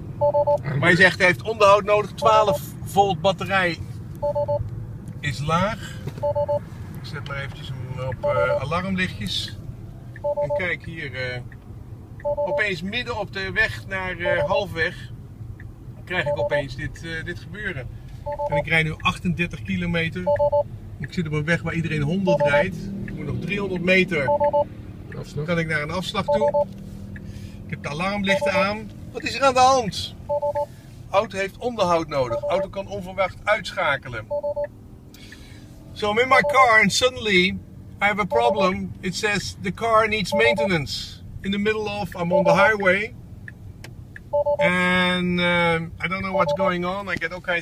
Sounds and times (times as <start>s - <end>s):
Speech: 0.6s - 3.8s, 5.2s - 5.8s, 7.1s - 9.6s, 10.4s - 11.4s, 12.5s - 15.1s, 16.1s - 17.9s, 18.5s - 20.3s, 21.0s - 24.3s, 25.2s - 26.6s, 27.7s - 30.1s, 31.1s - 34.3s, 36.0s - 43.1s, 44.6s - 47.6s.